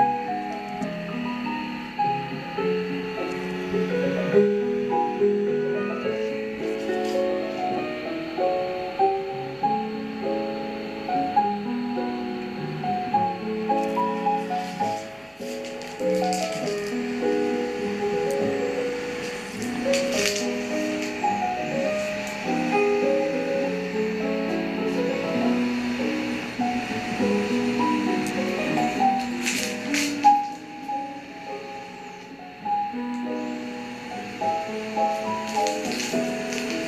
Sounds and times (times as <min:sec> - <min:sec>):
Music: 0:00.0 - 0:36.8.